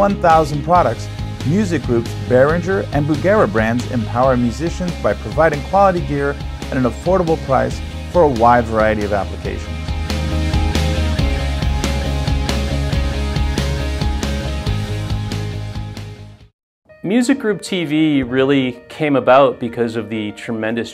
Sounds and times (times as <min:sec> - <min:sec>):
Speech: 0:00.0 - 0:09.7, 0:17.0 - 0:20.9
Music: 0:00.0 - 0:20.9.